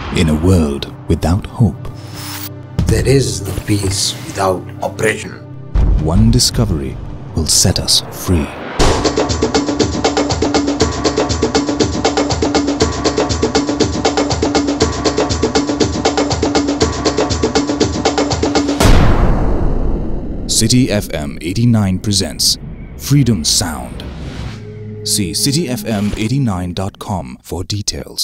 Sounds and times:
Speech: 0.0 - 1.9, 2.8 - 5.4, 6.0 - 8.6, 20.5 - 24.1, 25.1 - 28.2
Music: 0.0 - 27.4.

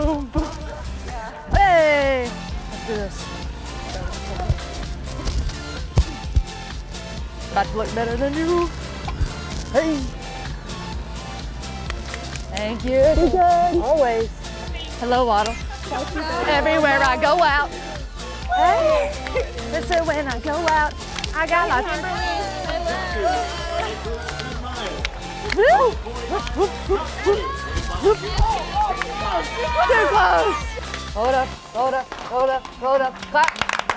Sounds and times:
Music: 0.0 - 33.9.

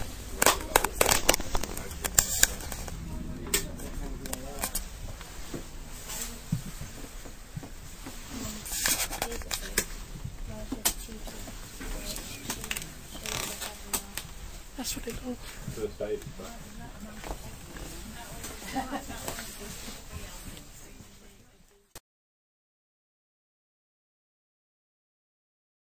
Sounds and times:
Speech: 8.3 - 22.0.

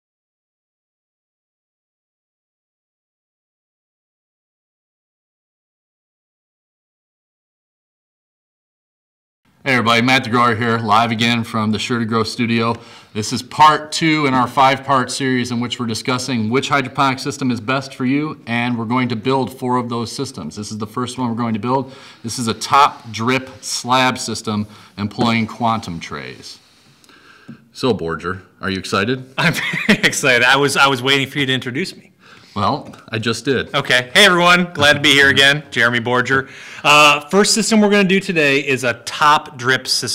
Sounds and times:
Speech: 9.6 - 26.6, 27.7 - 40.1.

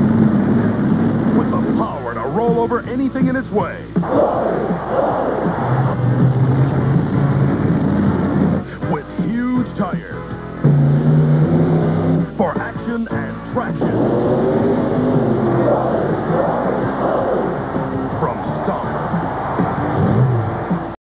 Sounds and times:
Music: 0.0 - 21.0
Speech: 1.4 - 4.0, 8.6 - 10.4, 12.2 - 14.3, 18.1 - 19.0.

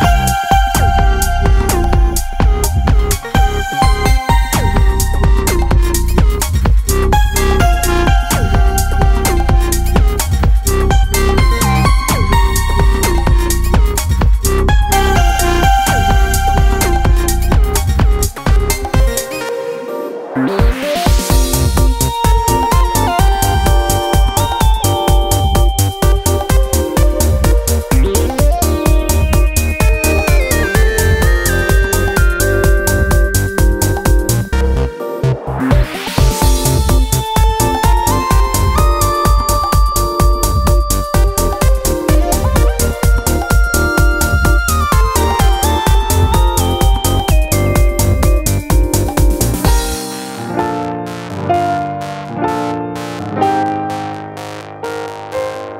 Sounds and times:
Electronica: 0.0 - 55.7.

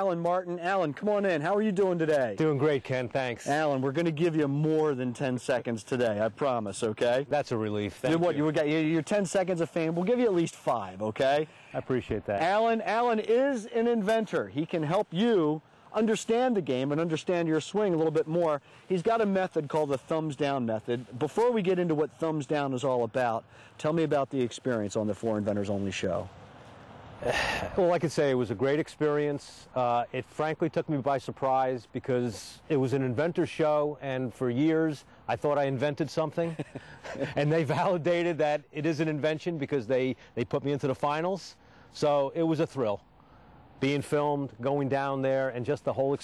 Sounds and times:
Speech: 0.0 - 26.3, 27.2 - 36.6, 37.2 - 43.0, 43.8 - 46.2.

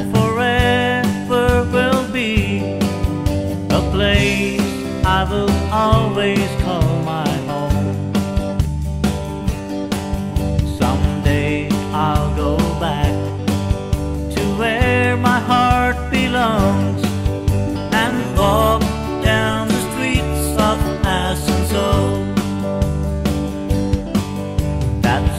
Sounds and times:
Country: 0.0 - 25.3.

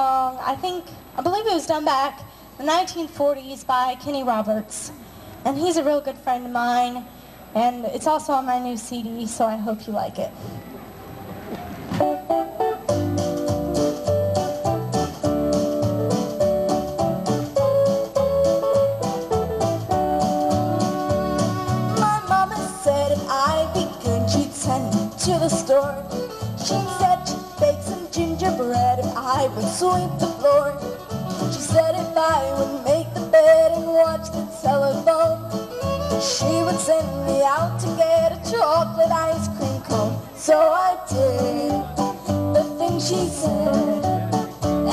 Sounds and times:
Music: 12.0 - 44.9
Singing: 36.2 - 44.9.

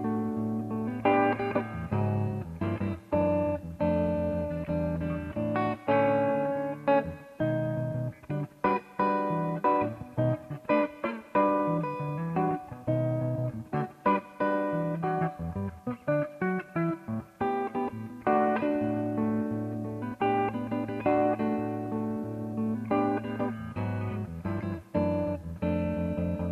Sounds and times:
Guitar: 0.0 - 26.5.

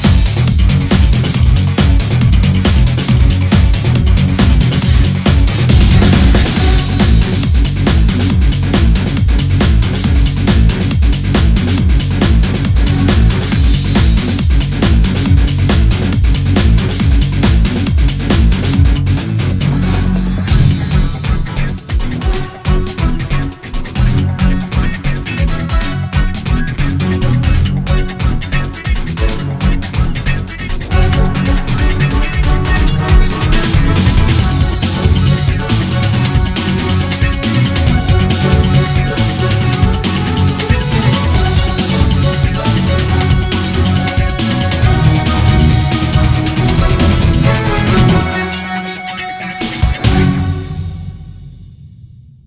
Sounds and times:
Electronica: 0.0 - 51.2
Soundtrack music: 0.0 - 52.3.

